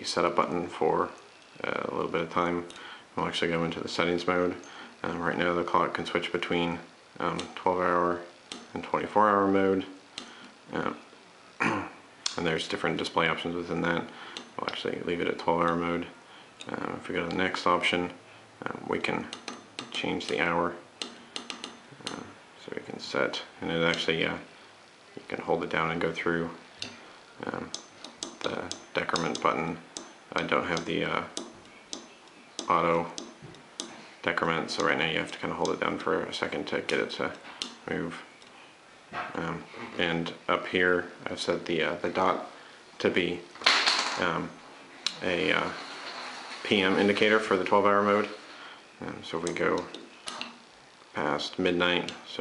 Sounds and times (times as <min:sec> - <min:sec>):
Speech: 0:00.0 - 0:10.0, 0:10.7 - 0:20.9, 0:22.0 - 0:24.5, 0:25.2 - 0:26.6, 0:27.4 - 0:27.8, 0:28.4 - 0:31.4, 0:32.0 - 0:33.2, 0:34.2 - 0:38.3, 0:39.2 - 0:43.5, 0:44.1 - 0:45.9, 0:46.6 - 0:50.0, 0:51.1 - 0:52.4
Inside, small room: 0:00.0 - 0:52.4.